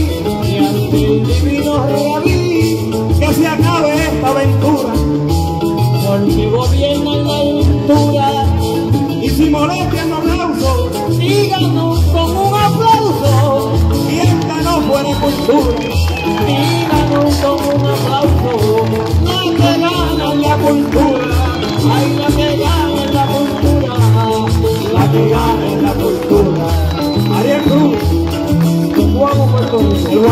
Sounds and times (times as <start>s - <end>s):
Singing: 12.5s - 28.0s, 28.9s - 30.3s.